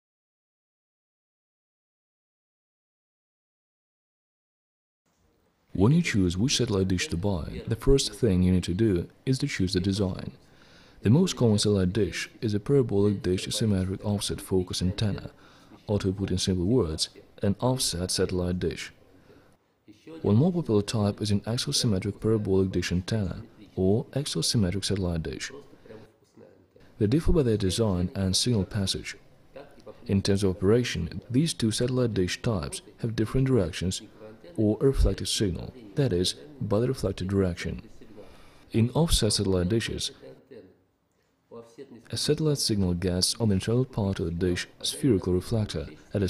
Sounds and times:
Speech: 5.7 - 10.4, 11.0 - 19.0, 19.8 - 40.8, 41.5 - 46.2.

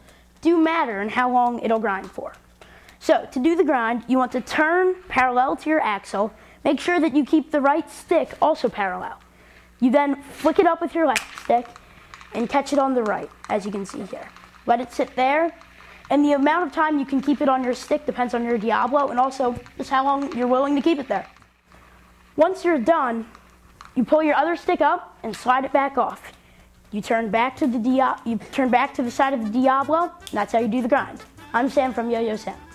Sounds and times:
Speech: 0.4 - 2.4, 3.0 - 9.2, 9.8 - 11.8, 12.4 - 21.4, 22.4 - 23.3, 24.0 - 32.7.

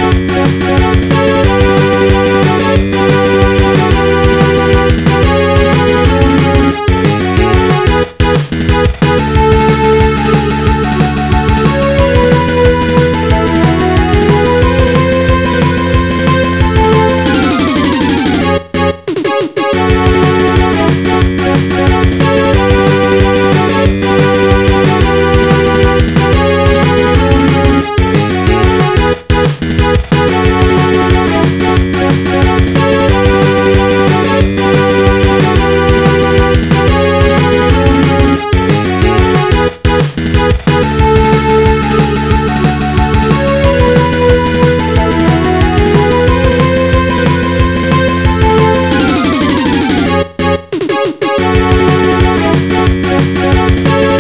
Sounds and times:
Music: 0.0 - 54.2.

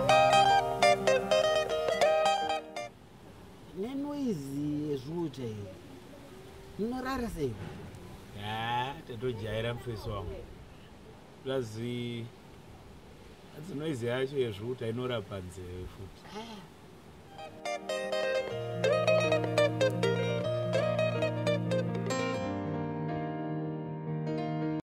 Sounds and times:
Music: 0.0 - 2.9, 17.3 - 24.8.

